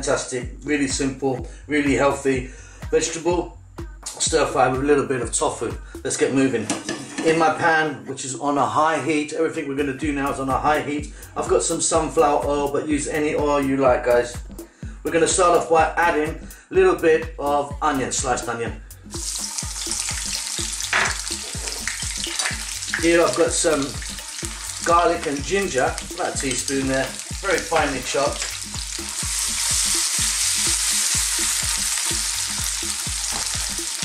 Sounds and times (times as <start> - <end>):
Speech: 0.0 - 3.5, 4.1 - 14.4, 15.0 - 18.8, 23.0 - 24.0, 24.8 - 28.5
Music: 0.0 - 34.0.